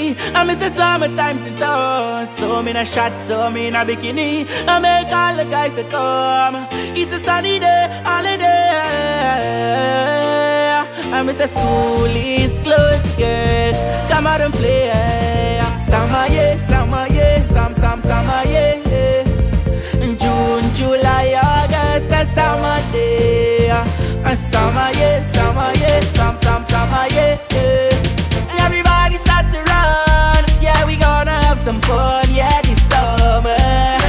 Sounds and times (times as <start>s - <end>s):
Theme music: 11.6s - 34.0s.